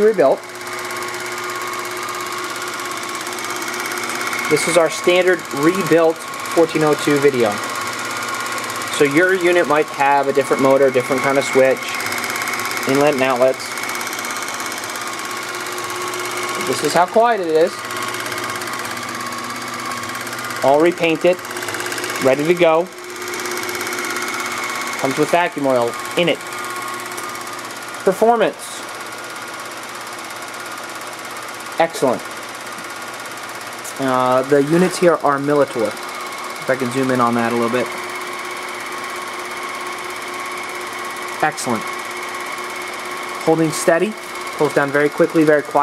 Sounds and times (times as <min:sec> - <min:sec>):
Speech: 0:00.0 - 0:00.4, 0:04.5 - 0:07.6, 0:09.0 - 0:12.0, 0:12.9 - 0:13.7, 0:16.6 - 0:17.8, 0:20.6 - 0:21.4, 0:22.2 - 0:22.9, 0:25.0 - 0:26.4, 0:28.1 - 0:28.8, 0:31.8 - 0:32.2, 0:33.9 - 0:36.0, 0:36.6 - 0:37.9, 0:41.4 - 0:41.9, 0:43.4 - 0:45.8.